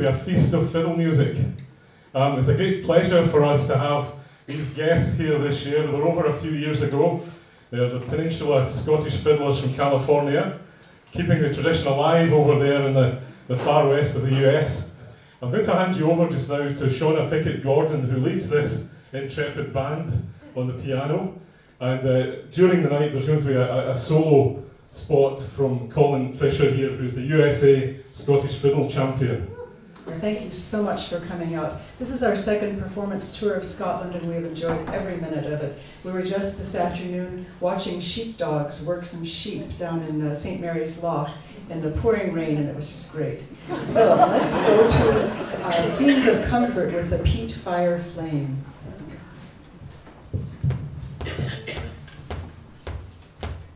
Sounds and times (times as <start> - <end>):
Speech: 0.0 - 1.6, 2.2 - 49.2.